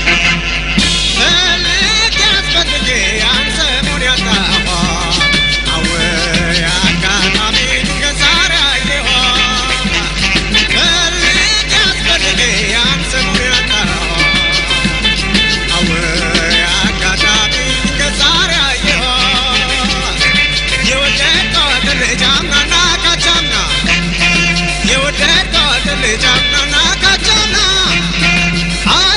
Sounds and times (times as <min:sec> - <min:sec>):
Music: 0:00.0 - 0:29.1.